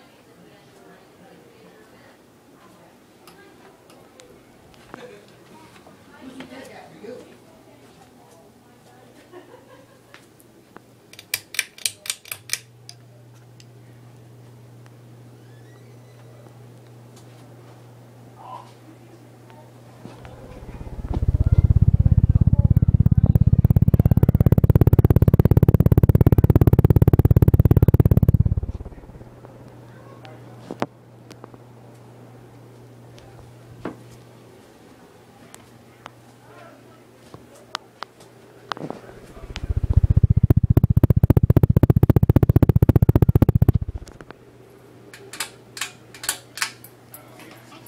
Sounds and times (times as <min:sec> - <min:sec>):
Mechanical fan: 0:00.0 - 0:47.8.